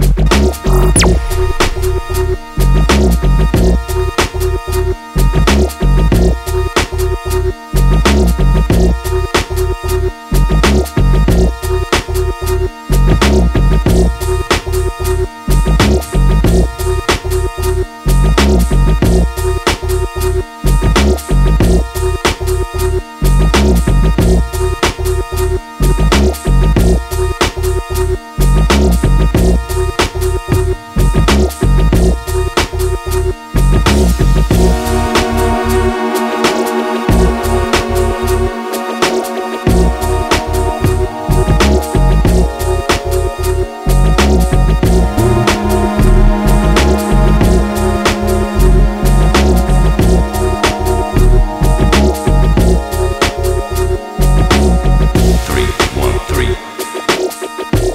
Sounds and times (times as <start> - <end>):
Music: 0.0 - 57.9.